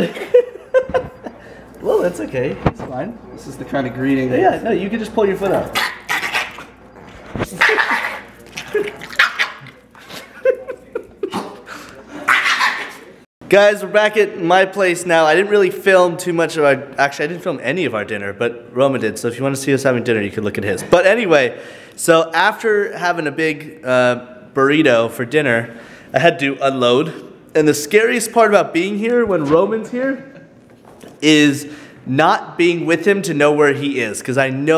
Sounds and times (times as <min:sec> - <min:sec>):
Bark: 0:05.8 - 0:06.7, 0:07.6 - 0:08.3, 0:09.2 - 0:09.7, 0:12.3 - 0:13.0
Speech: 0:13.0 - 0:30.4.